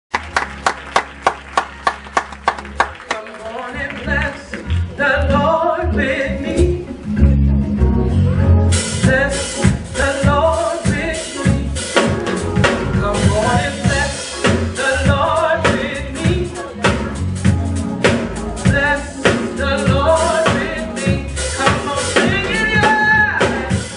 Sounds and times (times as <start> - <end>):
Gospel music: 0.1 - 23.9
Male singing: 3.1 - 6.9, 8.9 - 17.2, 18.6 - 23.9.